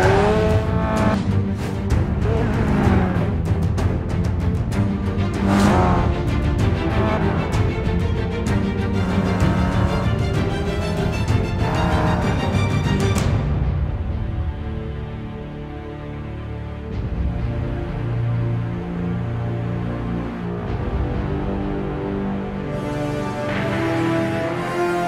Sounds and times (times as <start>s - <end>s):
Music: 0.0s - 25.0s.